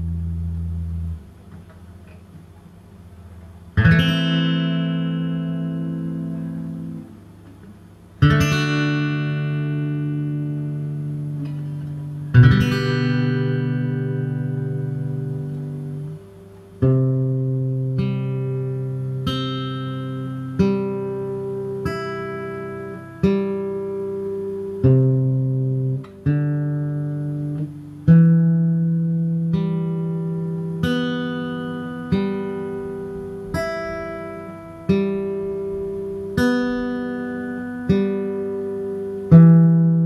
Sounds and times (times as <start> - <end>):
Acoustic guitar: 0.0 - 40.0
Inside, small room: 0.0 - 40.0.